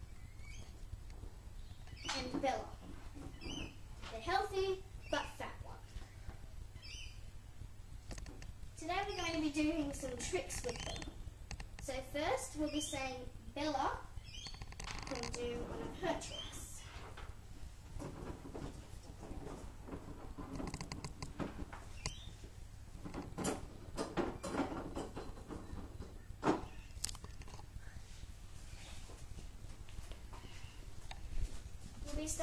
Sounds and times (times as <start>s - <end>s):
Speech: 2.1s - 2.8s, 4.1s - 5.9s, 8.8s - 11.1s, 11.8s - 14.1s, 15.1s - 16.9s, 32.0s - 32.4s
Mouse: 10.1s - 11.2s, 14.2s - 15.6s, 22.0s - 22.4s.